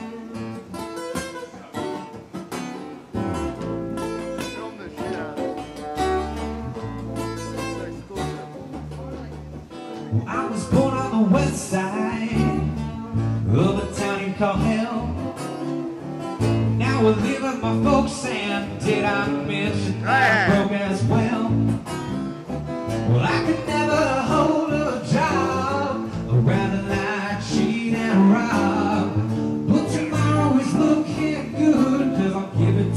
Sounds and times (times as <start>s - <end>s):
Independent music: 0.0s - 32.9s.